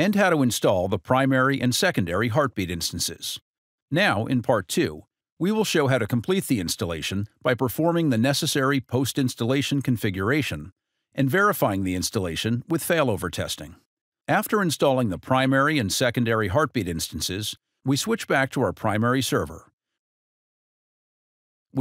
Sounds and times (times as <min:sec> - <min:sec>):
Speech: 0:00.0 - 0:19.7.